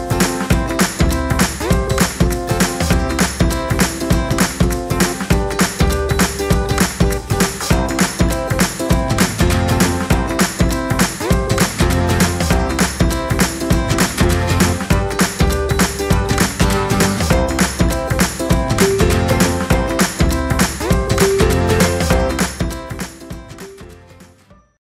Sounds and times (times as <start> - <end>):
Music: 0.0 - 24.8.